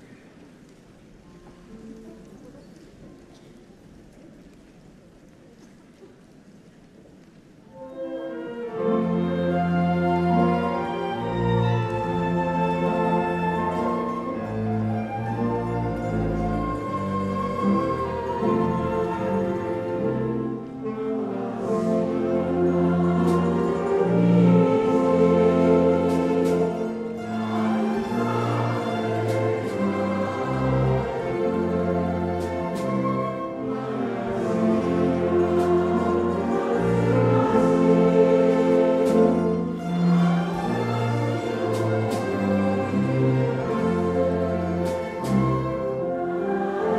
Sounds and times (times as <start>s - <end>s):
Orchestra: 0.0s - 46.9s.